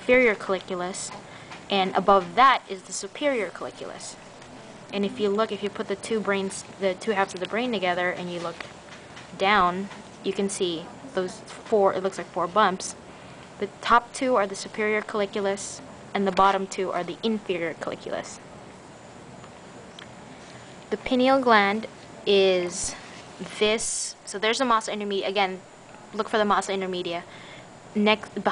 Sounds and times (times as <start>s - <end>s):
Speech: 0.0s - 4.2s, 4.9s - 8.6s, 9.4s - 13.0s, 13.6s - 18.4s, 20.9s - 27.3s, 28.0s - 28.5s.